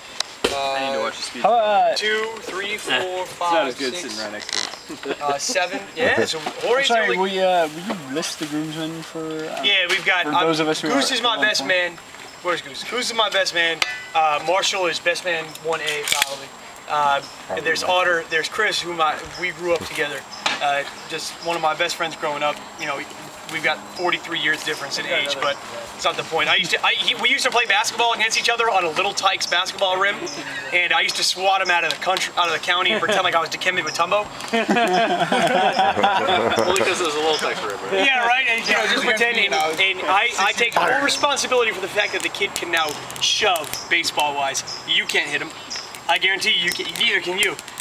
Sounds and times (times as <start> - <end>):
Male speech, man speaking: 0.5 - 34.3, 36.0 - 47.6.